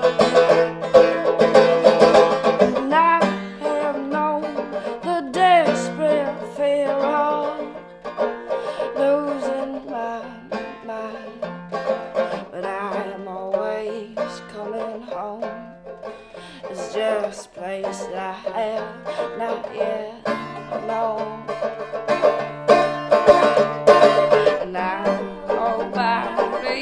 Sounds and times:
Music: 0.0s - 26.8s.

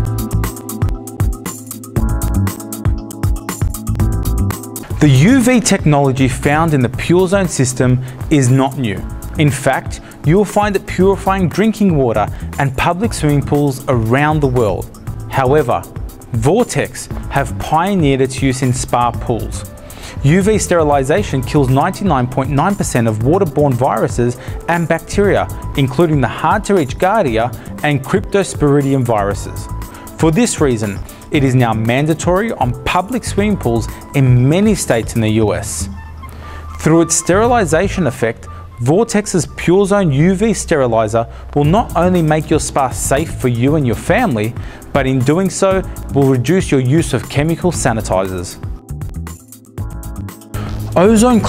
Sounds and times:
Music: 0.0s - 51.4s
Speech: 5.0s - 35.9s, 36.8s - 48.6s, 51.0s - 51.4s.

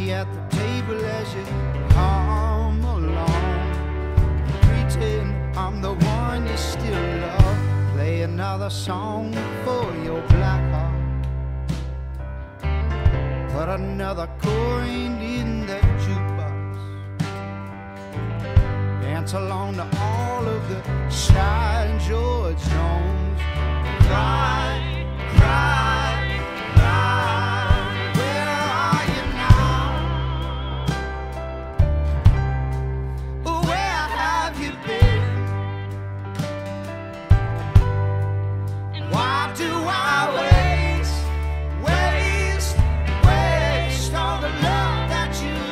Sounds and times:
Music: 0.0s - 45.7s.

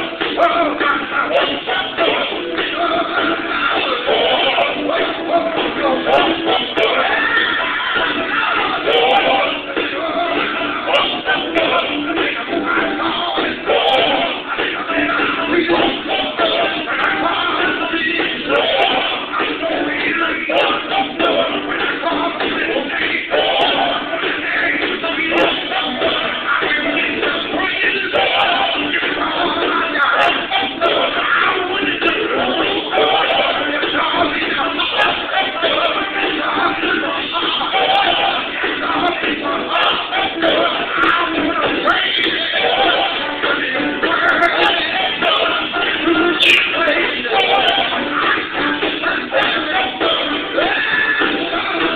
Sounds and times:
Choir: 0.0s - 51.9s
Male singing: 0.0s - 51.9s.

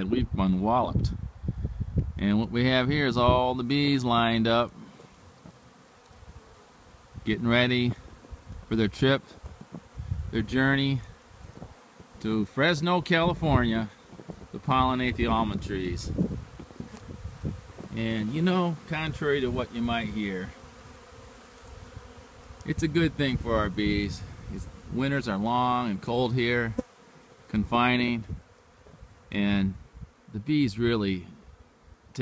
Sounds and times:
Bee, wasp, etc.: 1.2s - 32.2s
Fly, housefly: 2.9s - 32.2s.

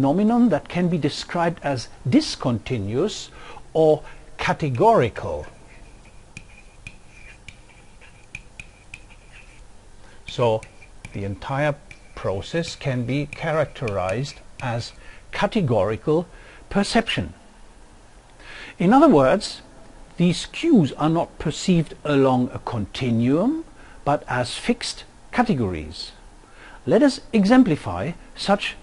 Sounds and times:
Speech: 0.0s - 5.6s, 10.3s - 17.4s, 18.8s - 19.6s, 20.2s - 26.2s, 26.8s - 28.8s
Inside, small room: 0.0s - 28.8s.

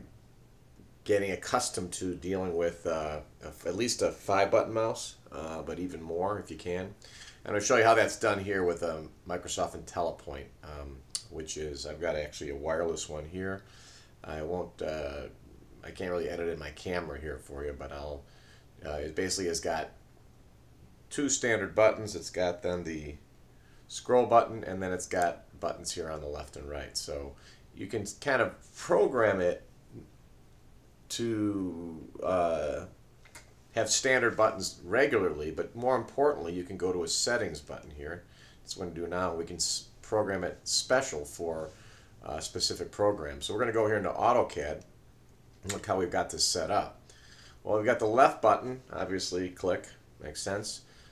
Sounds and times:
Speech: 1.0s - 20.0s, 21.1s - 23.2s, 23.9s - 30.1s, 31.1s - 33.0s, 33.7s - 44.9s, 45.6s - 47.0s, 47.6s - 50.9s.

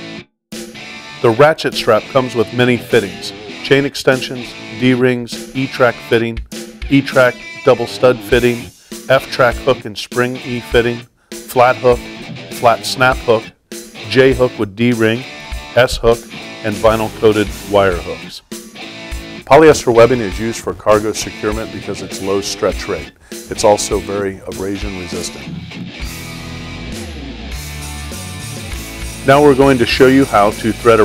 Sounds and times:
Music: 0.0s - 31.0s
Speech: 1.2s - 13.5s, 14.1s - 18.4s, 19.5s - 25.5s, 29.3s - 31.0s.

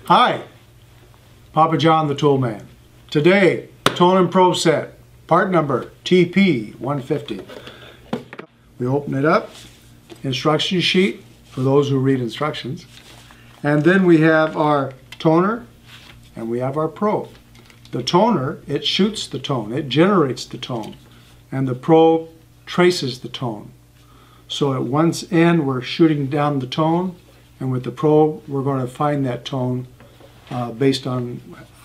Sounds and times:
Speech: 0.0s - 0.6s, 1.5s - 7.5s, 8.8s - 9.5s, 10.2s - 12.9s, 13.6s - 15.7s, 16.4s - 23.8s, 24.5s - 29.9s, 30.5s - 31.7s.

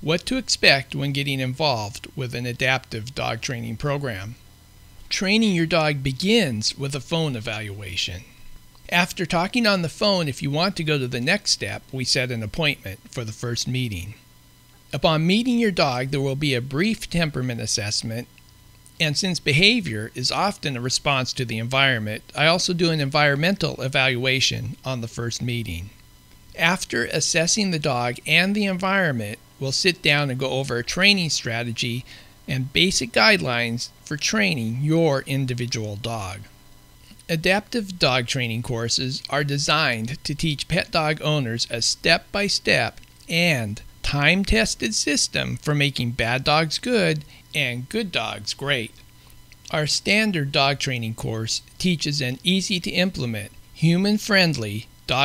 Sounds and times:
Speech: 0.0s - 4.4s, 5.1s - 14.2s, 14.9s - 18.3s, 19.0s - 26.0s, 26.6s - 36.5s, 37.2s - 49.0s, 49.7s - 55.2s.

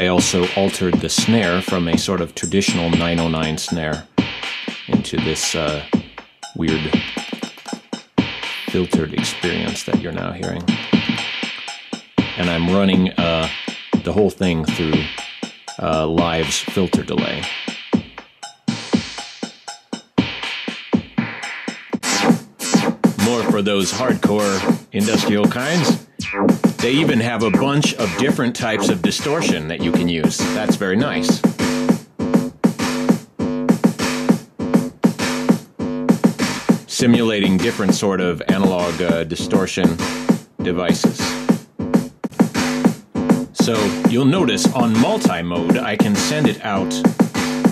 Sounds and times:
Speech: 0.0s - 4.1s, 4.9s - 5.9s, 6.6s - 7.2s, 8.6s - 10.8s, 12.4s - 15.1s, 15.8s - 17.6s, 23.2s - 26.0s, 26.8s - 31.5s, 36.9s - 41.4s, 43.6s - 47.1s
Drum machine: 0.0s - 47.7s
Synthesizer: 0.0s - 47.7s.

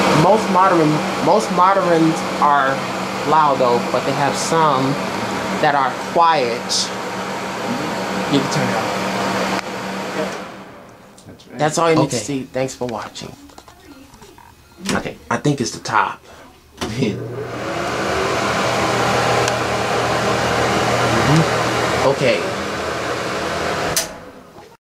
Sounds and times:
Mechanical fan: 0.0s - 13.8s, 14.4s - 24.6s
Speech: 0.1s - 5.0s, 5.6s - 6.9s, 7.7s - 8.9s, 11.2s - 17.2s, 21.1s - 22.5s.

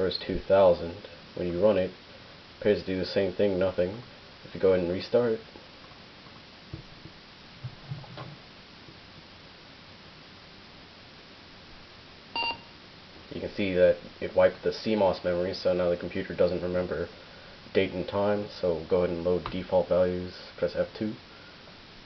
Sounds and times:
Speech: 0.0s - 2.0s, 2.6s - 5.5s, 13.3s - 17.1s, 17.7s - 21.2s
Beep, bleep: 12.4s - 12.7s.

